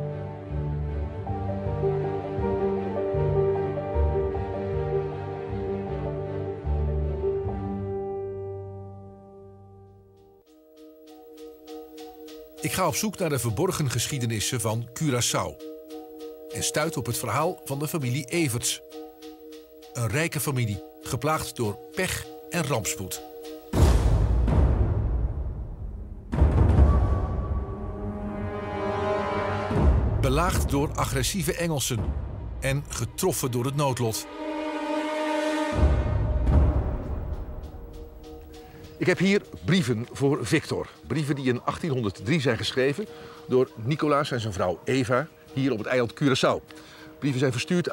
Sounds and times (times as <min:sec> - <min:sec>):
Music: 0:00.0 - 0:47.9
Speech: 0:12.6 - 0:15.6, 0:16.5 - 0:18.8, 0:20.0 - 0:23.2, 0:30.2 - 0:34.3, 0:39.0 - 0:46.6, 0:47.2 - 0:47.9.